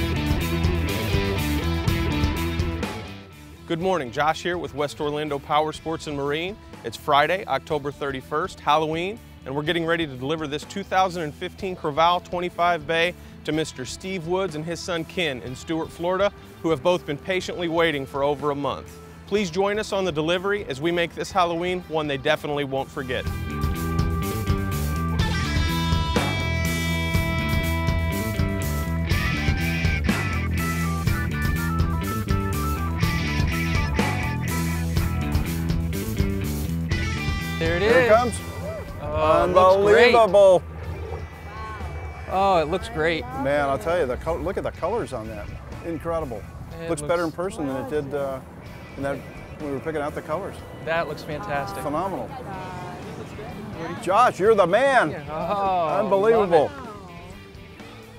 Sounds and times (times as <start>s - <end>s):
Music: 0.0s - 58.1s.